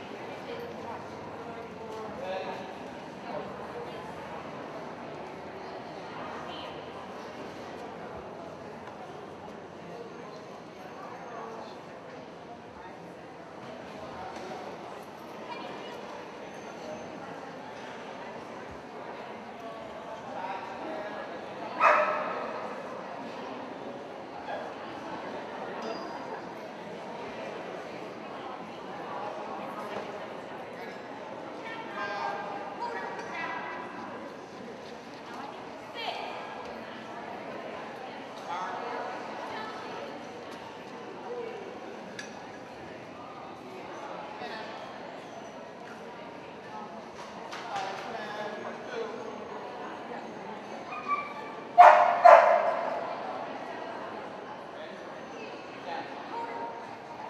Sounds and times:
Speech: 0.0s - 57.3s.

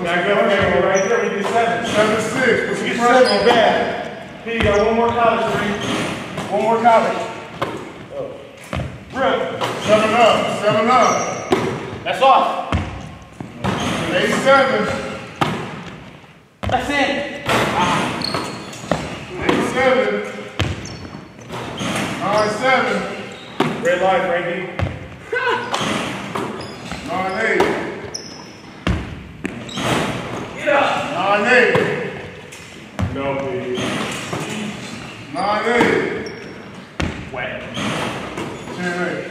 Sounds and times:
Basketball bounce: 20.6s - 21.1s.

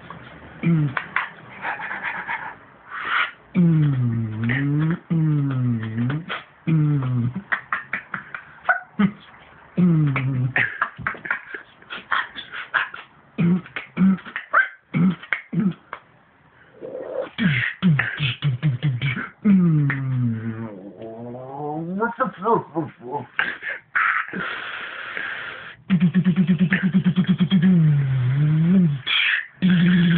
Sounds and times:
Beatboxing: 0.0s - 16.1s, 16.8s - 30.1s.

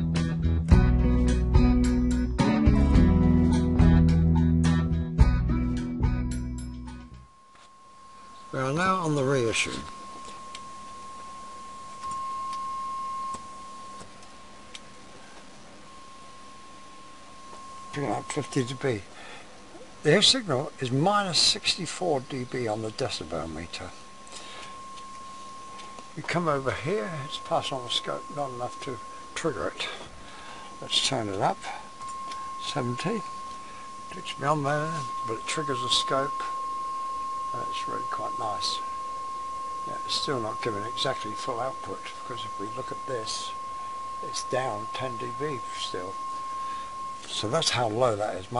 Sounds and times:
Speech: 8.5s - 9.9s, 17.9s - 19.1s, 20.0s - 24.0s, 26.2s - 30.1s, 30.8s - 31.8s, 32.6s - 33.3s, 34.1s - 36.5s, 37.6s - 38.8s, 39.9s - 43.6s, 44.2s - 46.2s, 47.3s - 48.6s.

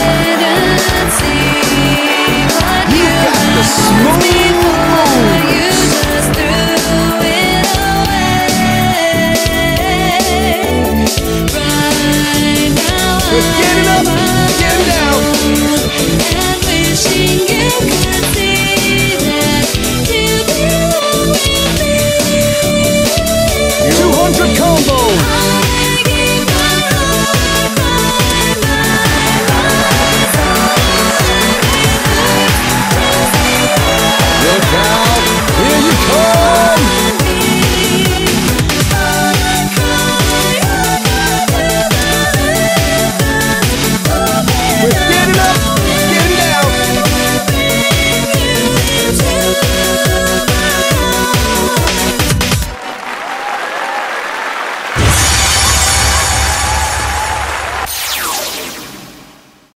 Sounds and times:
Applause: 0.0s - 8.9s, 13.3s - 16.4s, 23.9s - 42.1s, 44.7s - 47.2s, 51.3s - 58.5s.

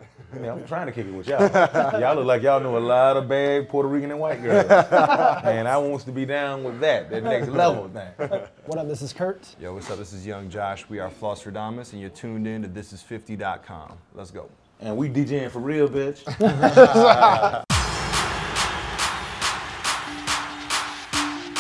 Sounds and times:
Speech: 5.4s - 16.3s.

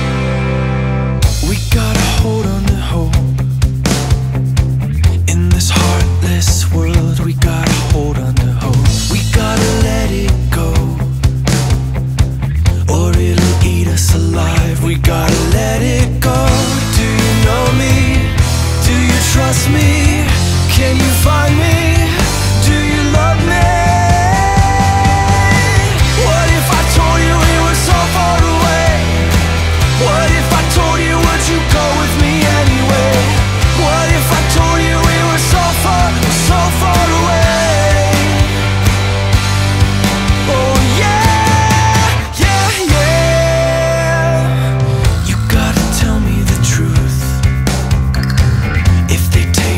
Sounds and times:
Music: 0.0s - 49.7s.

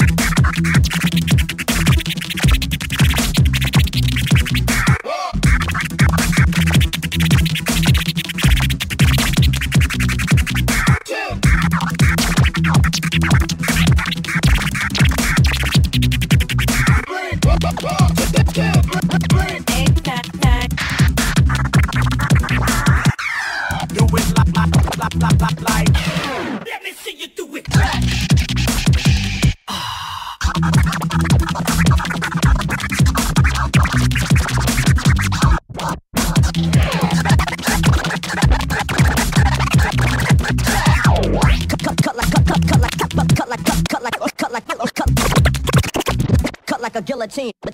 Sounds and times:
Electronic music: 0.0s - 26.6s, 27.7s - 29.6s, 30.4s - 44.2s
Scratching (performance technique): 0.0s - 26.8s, 27.6s - 29.6s, 30.4s - 47.7s.

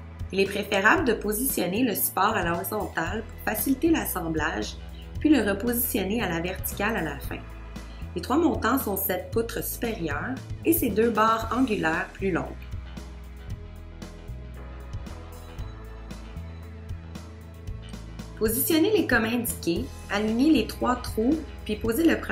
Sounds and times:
Music: 0.0s - 22.3s
Speech: 0.4s - 7.4s, 8.2s - 12.6s, 18.4s - 22.3s.

